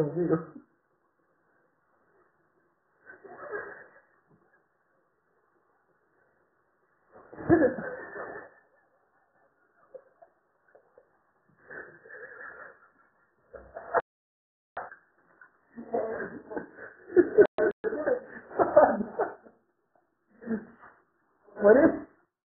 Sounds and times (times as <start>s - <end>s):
Speech: 0.0s - 0.6s, 21.5s - 22.2s.